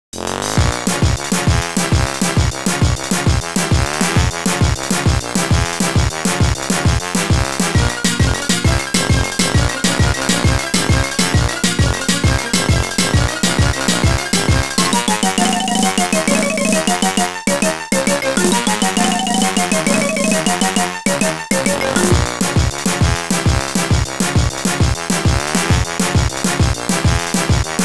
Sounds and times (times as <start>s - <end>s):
Music: 0.2s - 27.8s.